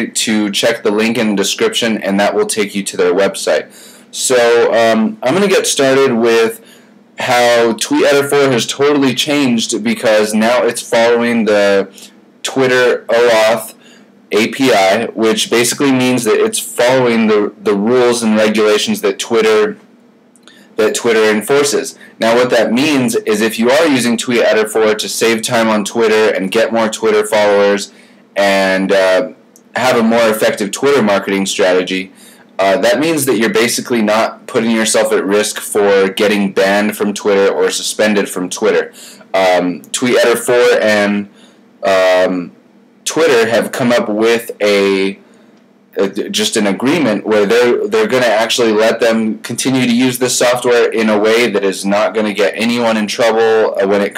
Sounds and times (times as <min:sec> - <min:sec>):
Speech: 0:00.0 - 0:19.8, 0:20.5 - 0:45.2, 0:46.0 - 0:54.1.